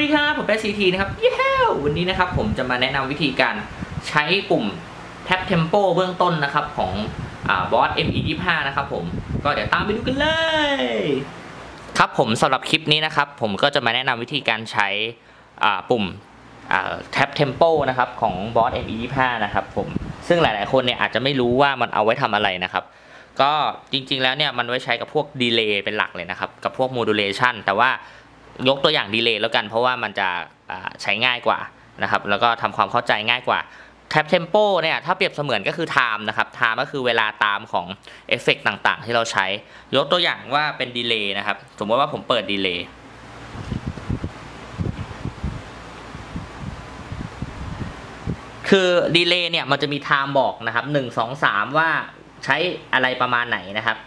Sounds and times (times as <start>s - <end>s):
Speech: 0.0s - 43.0s, 48.6s - 54.0s.